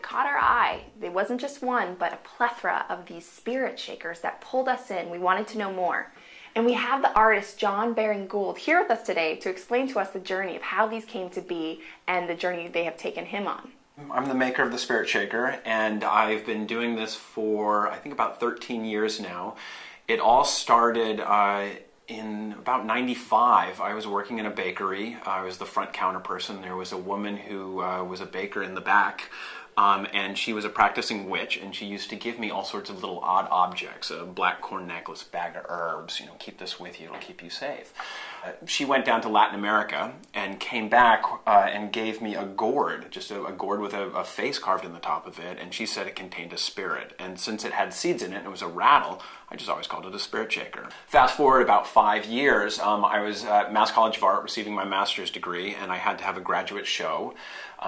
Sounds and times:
Speech: 0:00.0 - 0:57.8.

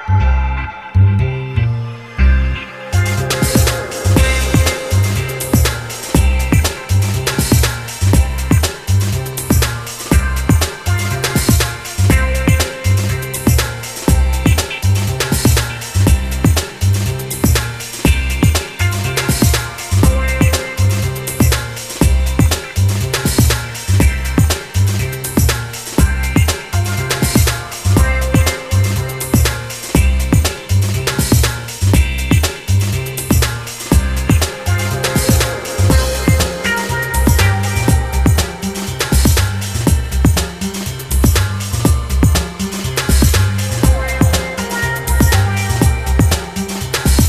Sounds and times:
Music: 0:00.0 - 0:47.2.

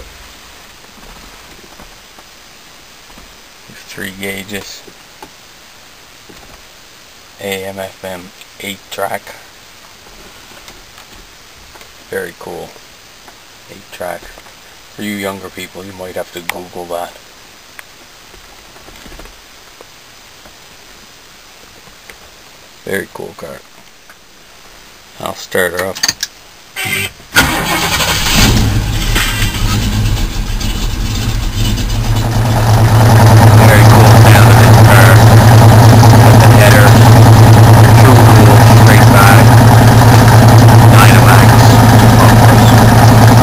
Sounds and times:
Outside, rural or natural: 0:00.0 - 0:43.4
Speech: 0:03.7 - 0:04.9, 0:07.4 - 0:09.4, 0:12.1 - 0:12.8, 0:13.7 - 0:17.2, 0:22.8 - 0:23.7, 0:25.2 - 0:26.0, 0:33.5 - 0:35.2, 0:36.2 - 0:37.0, 0:37.8 - 0:39.6, 0:40.8 - 0:42.9
Car: 0:26.8 - 0:43.4.

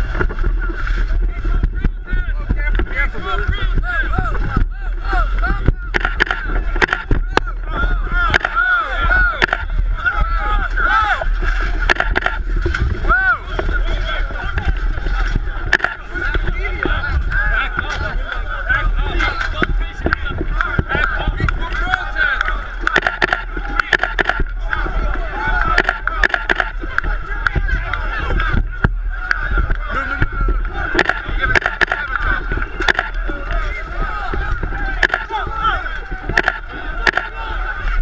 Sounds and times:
Speech: 0:00.6 - 0:11.8, 0:13.0 - 0:38.0
Single-lens reflex camera: 0:06.0 - 0:07.1, 0:11.9 - 0:12.4, 0:22.9 - 0:24.4, 0:25.8 - 0:26.7, 0:31.0 - 0:32.1, 0:35.0 - 0:35.2, 0:36.4 - 0:37.3.

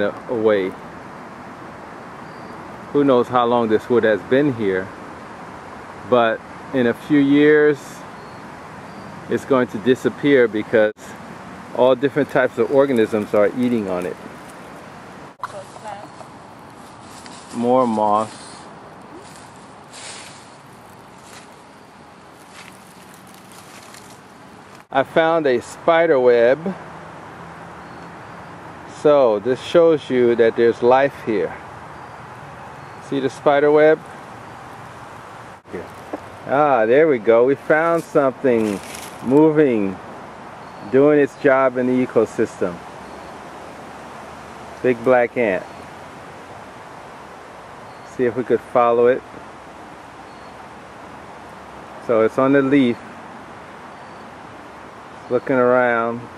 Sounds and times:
Speech: 0:00.0 - 0:00.8, 0:03.0 - 0:04.9, 0:06.1 - 0:08.0, 0:09.3 - 0:11.2, 0:11.8 - 0:14.2, 0:15.4 - 0:16.1, 0:17.5 - 0:18.5, 0:24.9 - 0:26.8, 0:28.9 - 0:31.6, 0:33.0 - 0:34.0, 0:35.7 - 0:35.9, 0:36.5 - 0:40.0, 0:40.9 - 0:42.8, 0:44.8 - 0:45.7, 0:48.1 - 0:49.2, 0:52.0 - 0:53.0, 0:55.3 - 0:56.3
Outside, rural or natural: 0:00.0 - 0:56.3.

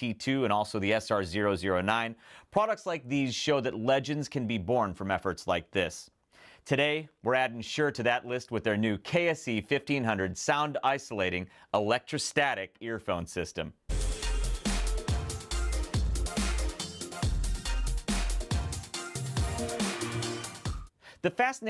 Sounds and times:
Speech: 0:00.0 - 0:06.1, 0:06.7 - 0:13.8, 0:21.2 - 0:21.7
Music: 0:13.9 - 0:21.0.

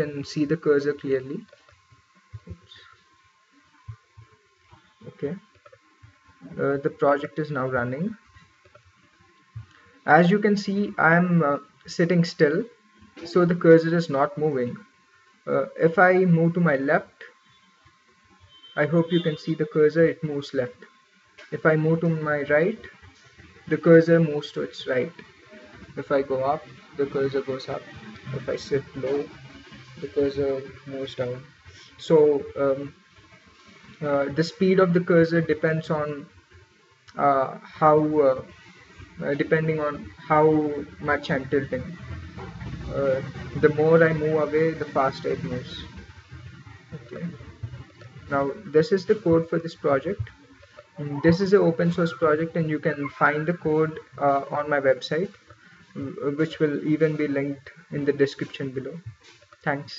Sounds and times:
Speech: 0:00.0 - 0:01.5, 0:05.0 - 0:05.4, 0:06.4 - 0:08.2, 0:10.1 - 0:14.8, 0:15.5 - 0:17.3, 0:18.8 - 0:20.8, 0:21.5 - 0:23.0, 0:23.7 - 0:25.3, 0:25.9 - 0:29.4, 0:30.0 - 0:33.0, 0:34.0 - 0:36.3, 0:37.1 - 0:42.1, 0:42.9 - 0:46.0, 0:47.0 - 0:50.3, 0:51.0 - 0:55.4, 0:56.0 - 0:59.0, 0:59.6 - 0:59.9.

